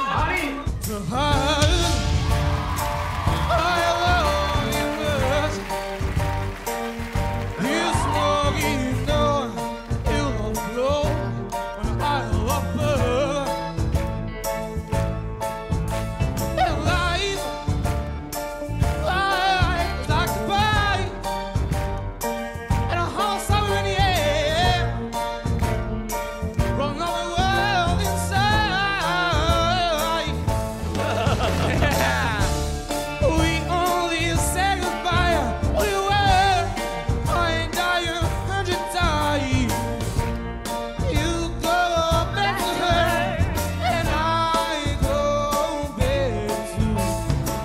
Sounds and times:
Soul music: 0.0s - 47.6s.

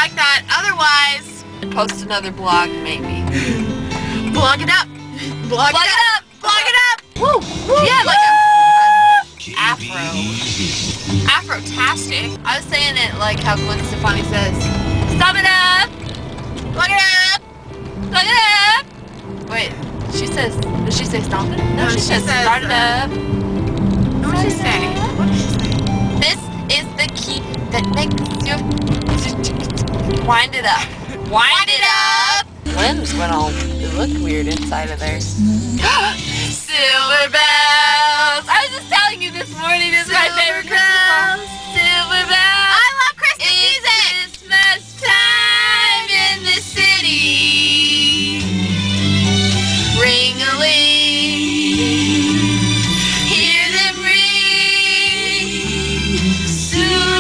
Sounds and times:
Music: 0.0s - 57.2s.

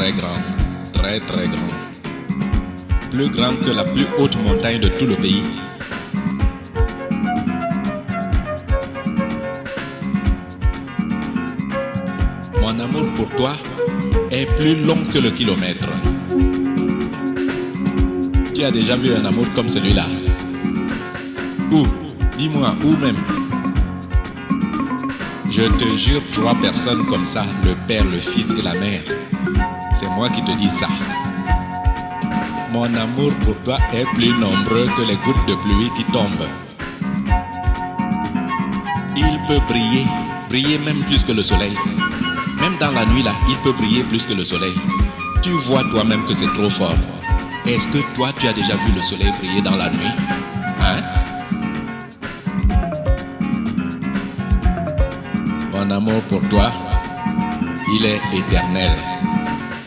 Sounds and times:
Speech: 0.0s - 1.8s, 3.2s - 5.7s, 12.6s - 16.2s, 18.6s - 20.4s, 21.7s - 23.4s, 25.5s - 29.2s, 30.0s - 31.1s, 32.7s - 36.7s, 39.2s - 41.9s, 42.6s - 51.2s, 55.7s - 57.0s, 57.9s - 59.2s
Music: 0.0s - 59.8s.

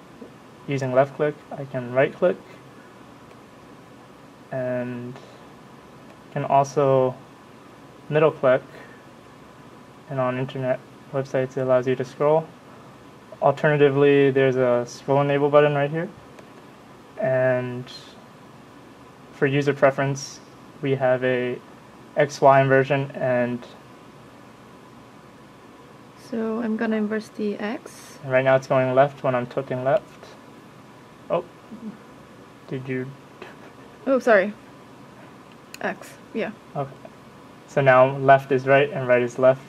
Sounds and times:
Speech: 0.7s - 2.6s, 4.5s - 5.4s, 6.4s - 7.2s, 8.1s - 8.9s, 10.1s - 12.5s, 13.4s - 16.2s, 17.2s - 18.2s, 19.4s - 21.6s, 22.2s - 23.8s, 26.2s - 30.4s, 31.3s - 32.0s, 32.7s - 34.6s, 35.8s - 37.1s, 37.7s - 39.6s.

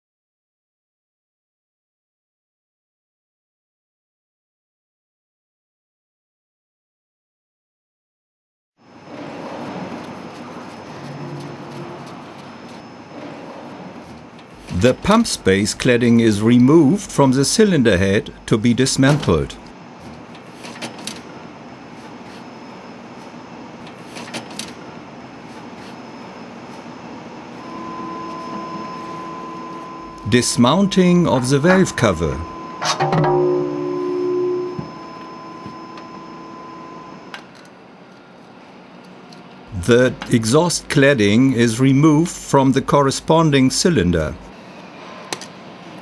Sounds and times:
Speech: 14.7s - 19.7s, 30.2s - 32.6s, 39.7s - 44.5s.

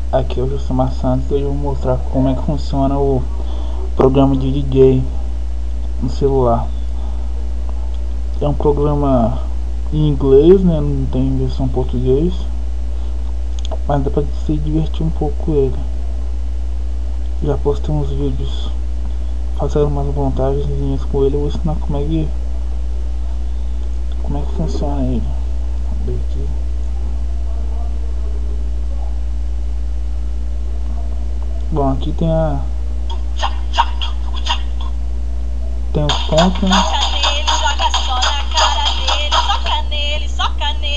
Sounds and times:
Speech: 0.0s - 5.2s, 6.0s - 6.7s, 7.8s - 12.5s, 13.6s - 16.2s, 17.4s - 18.8s, 19.6s - 22.4s, 24.2s - 29.3s, 30.7s - 32.8s, 35.4s - 40.9s
Music: 36.1s - 40.5s.

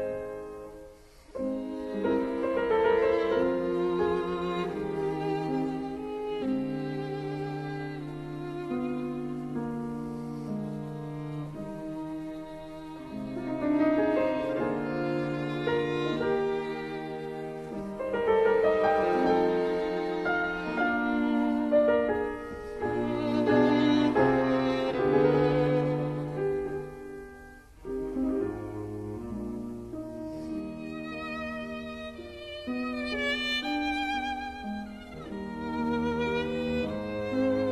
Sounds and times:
Violin, fiddle: 0.0s - 37.7s.

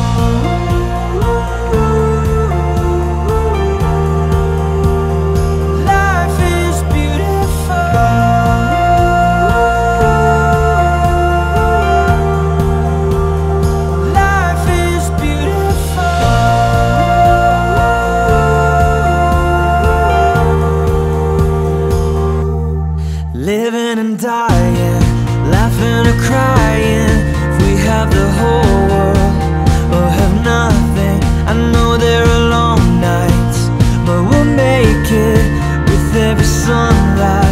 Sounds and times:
Christian music: 0.0s - 37.5s.

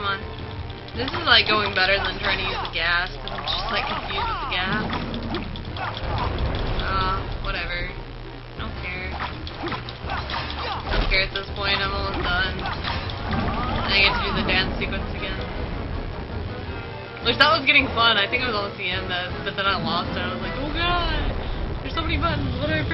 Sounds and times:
Music: 0.0s - 22.9s
Speech: 1.0s - 4.9s, 6.8s - 8.0s, 8.6s - 9.2s, 10.6s - 12.7s, 13.8s - 15.5s, 17.2s - 22.9s.

